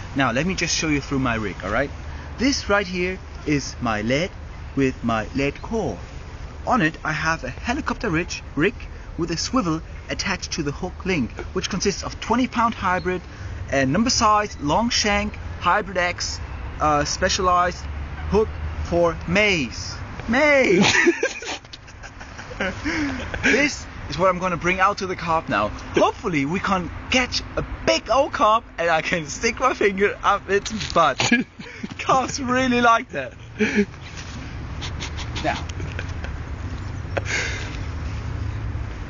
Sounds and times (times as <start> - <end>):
Speech: 0.2 - 6.0, 6.7 - 21.0, 23.4 - 31.4, 32.0 - 33.4, 35.4 - 35.7.